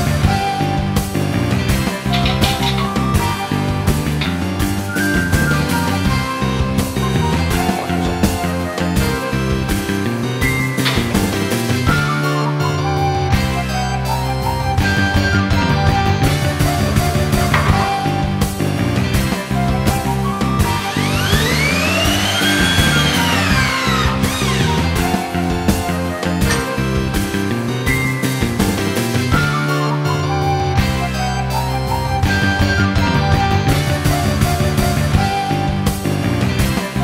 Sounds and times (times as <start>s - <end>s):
Music: 0.0s - 37.0s.